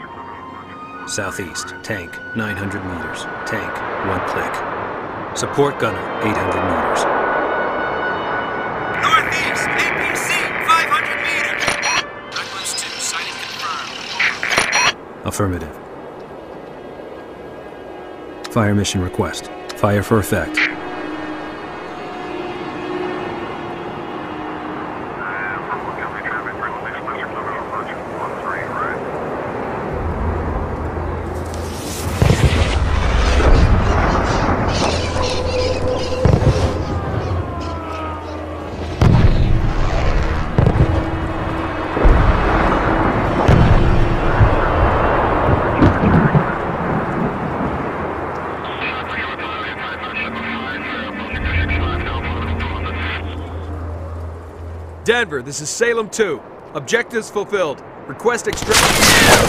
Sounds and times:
Music: 0.0s - 3.5s, 49.4s - 55.1s
Speech: 5.4s - 7.1s, 18.5s - 20.6s, 25.2s - 29.0s, 48.7s - 53.4s, 55.0s - 59.4s.

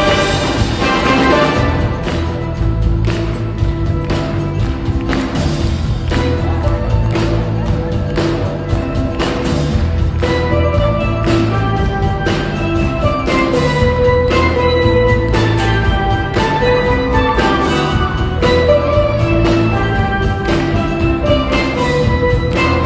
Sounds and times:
Music: 0.0s - 22.8s
Applause: 0.2s - 18.6s, 19.4s - 22.8s.

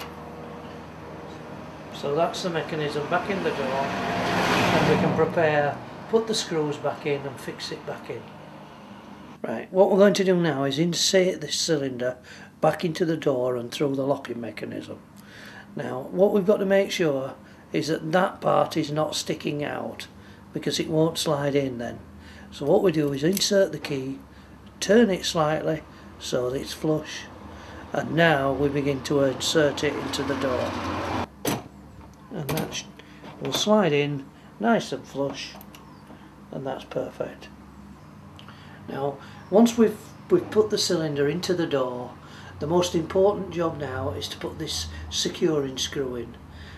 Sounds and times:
Speech: 1.9s - 8.3s, 9.4s - 15.0s, 15.7s - 24.2s, 24.8s - 27.3s, 27.9s - 30.8s, 32.3s - 35.6s, 36.5s - 37.6s, 38.9s - 46.4s.

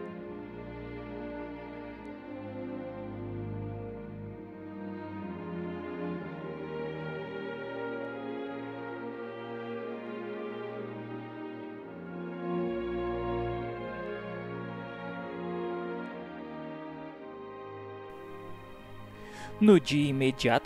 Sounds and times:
Music: 0.0s - 20.6s.

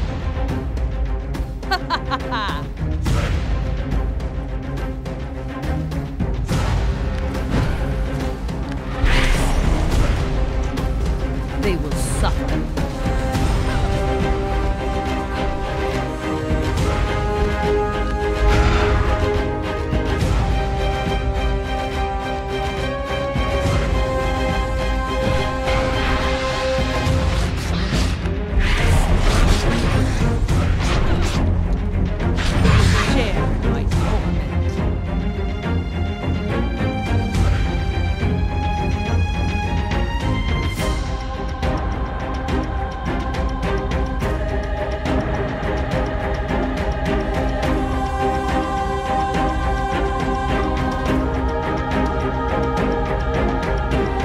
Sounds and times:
Music: 0.0s - 54.2s
Speech: 11.6s - 12.6s, 33.0s - 34.7s.

